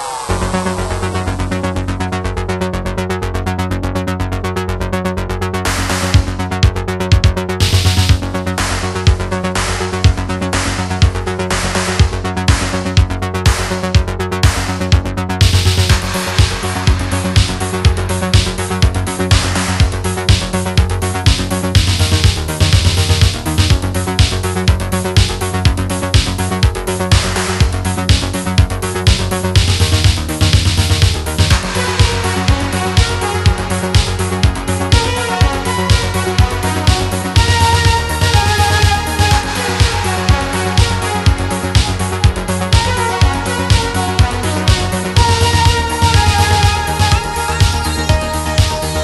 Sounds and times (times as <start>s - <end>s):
Music: 0.0s - 49.0s.